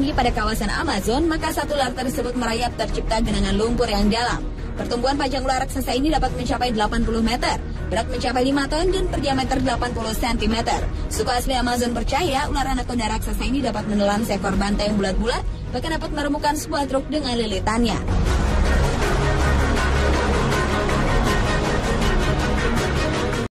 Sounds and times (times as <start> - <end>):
Speech: 0.0 - 18.0
Music: 0.0 - 23.5.